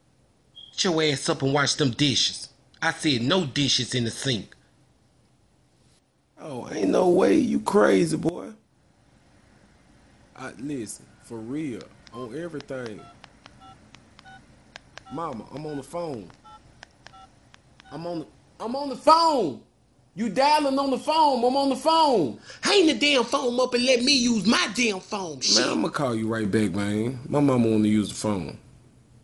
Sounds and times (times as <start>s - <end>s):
Speech: 6.4s - 8.6s, 17.9s - 28.6s
Telephone dialing, DTMF: 13.0s - 14.4s, 16.4s - 18.0s.